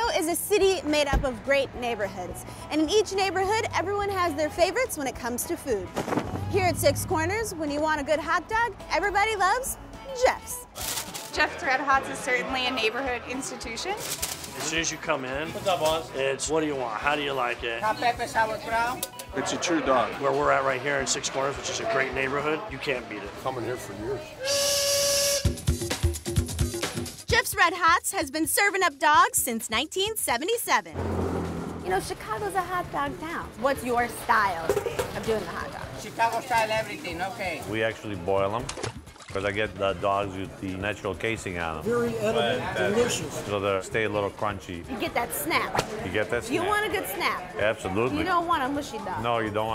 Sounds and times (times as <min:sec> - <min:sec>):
Music: 0:00.0 - 0:49.7.